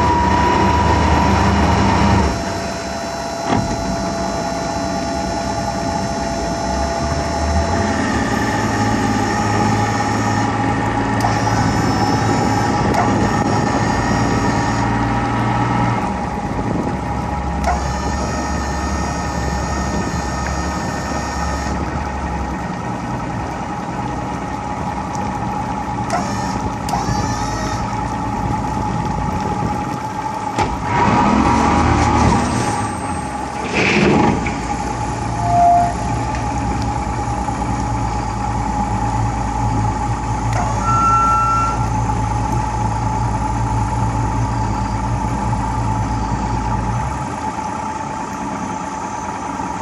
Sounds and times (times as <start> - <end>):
Motorboat, speedboat: 0.0 - 49.8.